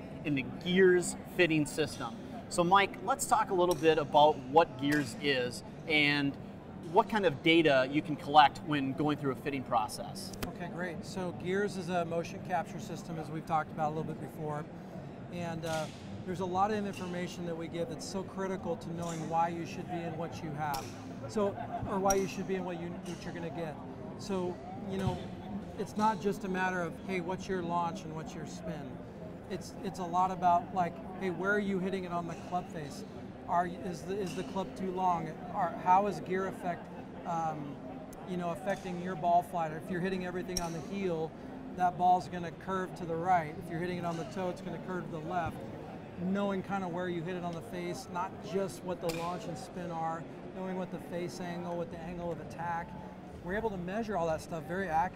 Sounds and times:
Speech: 0.0 - 14.7, 15.3 - 55.1.

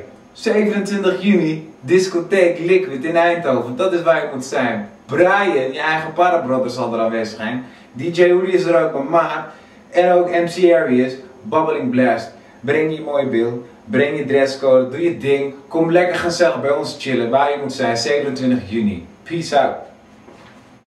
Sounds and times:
Speech: 0.0 - 20.0.

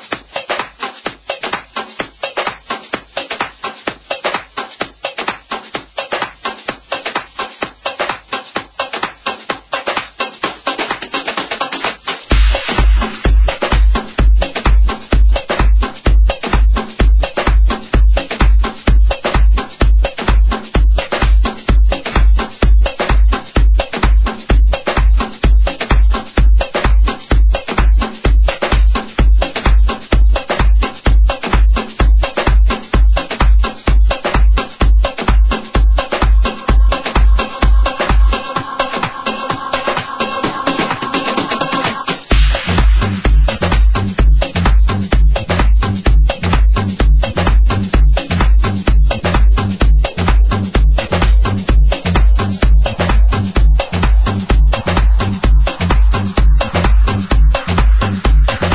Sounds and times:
Music: 0.0 - 58.7.

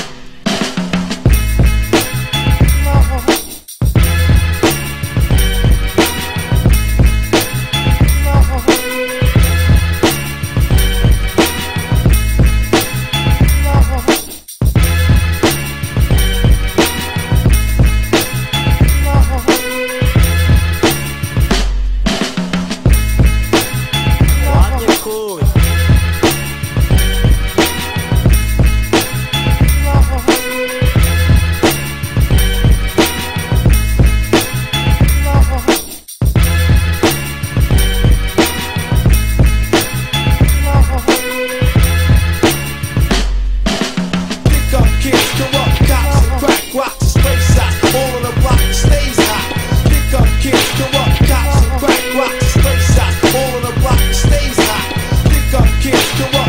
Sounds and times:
Music: 0.0 - 56.4
Speech: 2.8 - 3.4, 8.2 - 8.9, 13.6 - 14.2, 19.0 - 19.6, 24.4 - 25.7, 29.8 - 30.4, 35.2 - 35.8, 40.6 - 41.3.

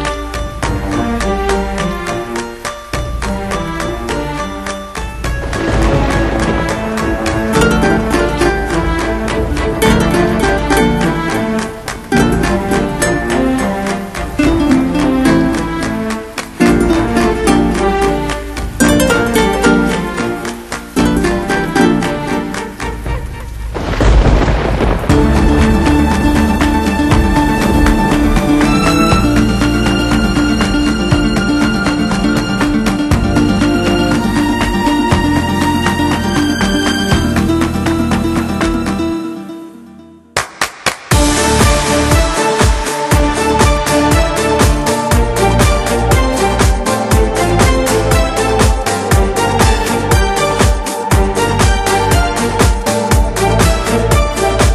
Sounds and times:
Music: 0.0 - 54.7.

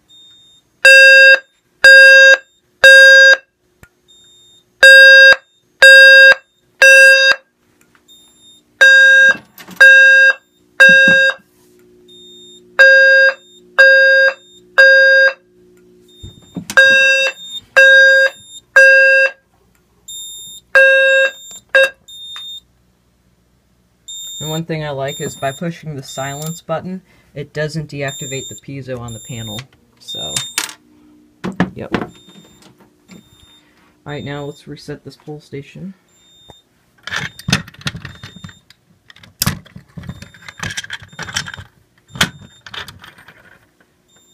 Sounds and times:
Fire alarm: 0.1 - 7.5, 8.1 - 11.5, 12.1 - 19.4, 20.1 - 22.6, 24.1 - 26.6, 28.0 - 30.6, 32.1 - 34.6, 36.1 - 38.7, 40.0 - 42.8, 44.1 - 44.3.

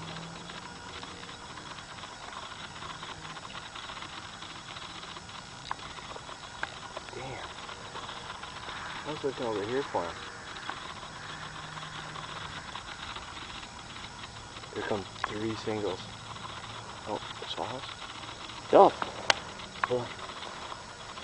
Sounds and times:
Speech: 7.1 - 7.5, 9.1 - 10.2, 14.8 - 16.0, 17.1 - 17.9, 18.7 - 19.0, 19.9 - 20.1.

